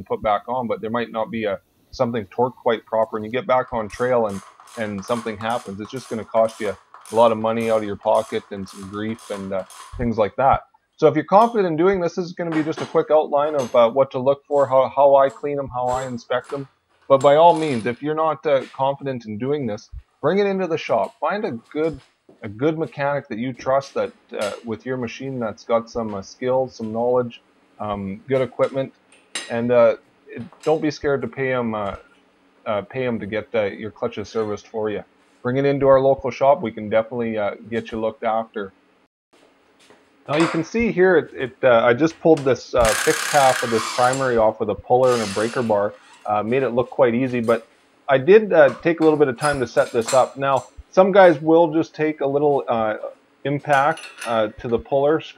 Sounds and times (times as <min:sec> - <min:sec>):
Speech: 0:00.0 - 0:28.9, 0:29.5 - 0:32.0, 0:32.7 - 0:38.7, 0:40.3 - 0:55.3.